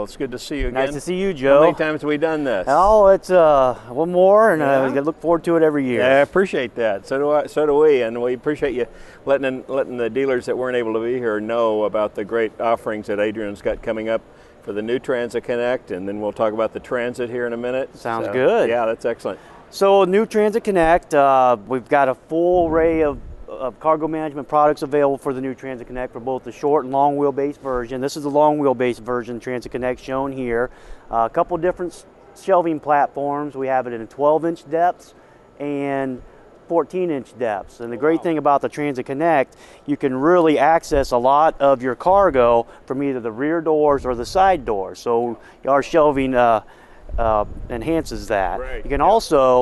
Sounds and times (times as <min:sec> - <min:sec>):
Speech: 0:00.0 - 0:46.6, 0:47.2 - 0:49.6.